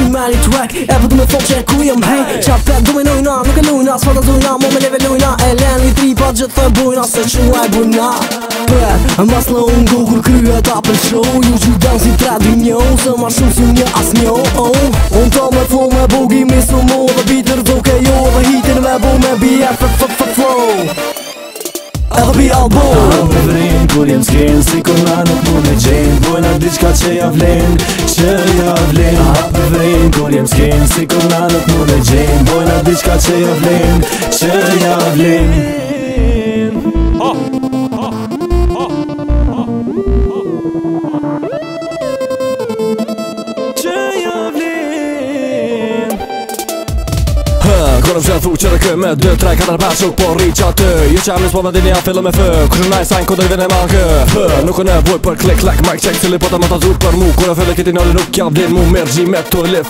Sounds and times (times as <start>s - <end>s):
Pop music: 0.0s - 59.8s.